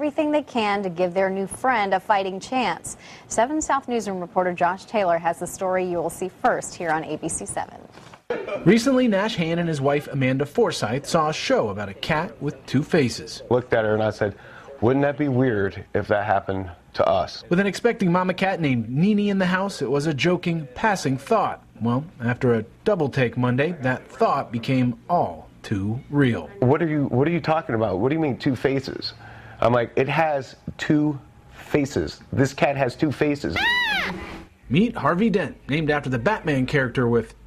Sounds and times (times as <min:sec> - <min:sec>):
Speech: 0:08.5 - 0:33.6.